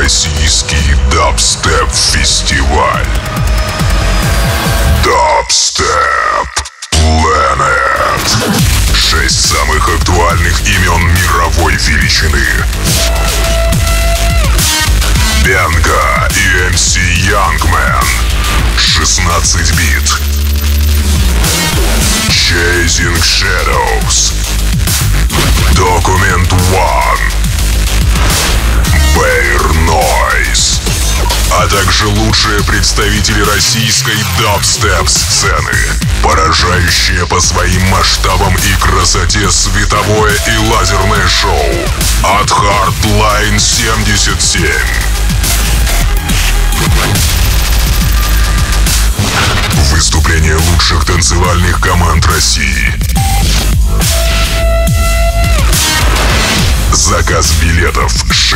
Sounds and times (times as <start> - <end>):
Dubstep: 7.9 - 58.5.